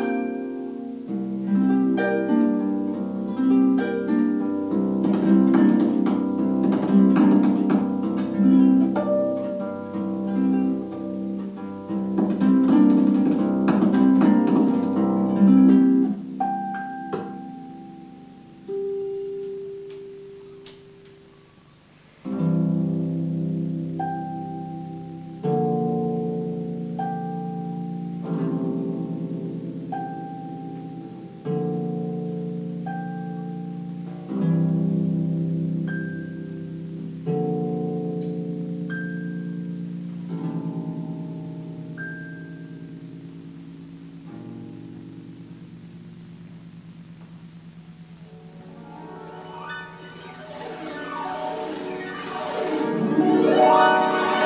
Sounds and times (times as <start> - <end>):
Plucked string instrument: 0.0 - 21.2, 22.2 - 54.4
Harp: 0.0 - 54.4
Inside, small room: 0.0 - 54.4.